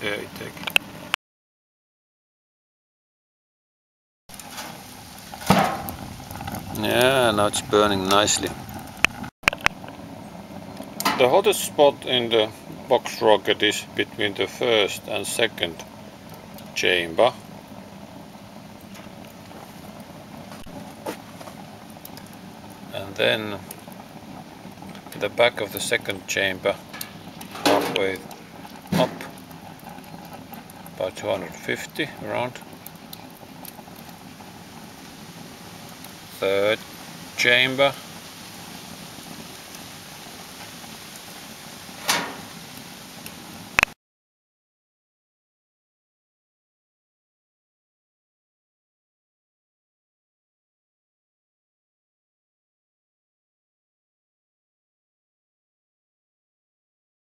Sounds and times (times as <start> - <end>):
Speech: 0.0 - 0.6, 6.8 - 8.6, 11.1 - 15.8, 16.8 - 17.4, 22.9 - 23.6, 25.2 - 26.8, 27.8 - 28.3, 28.9 - 29.3, 31.0 - 32.6, 36.4 - 36.8, 37.4 - 38.0
Outside, rural or natural: 0.0 - 1.2, 4.3 - 44.0.